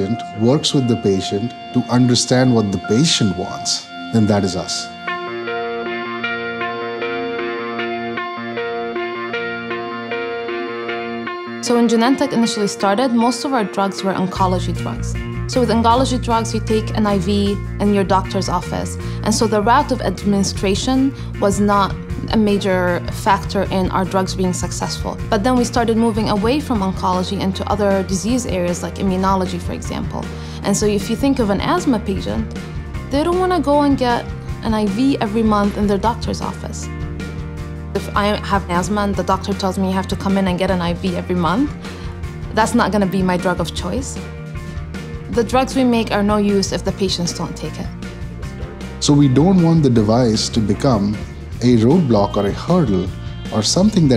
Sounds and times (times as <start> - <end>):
Music: 0.0 - 54.1
Speech: 11.6 - 32.4, 33.1 - 36.8, 49.0 - 54.1.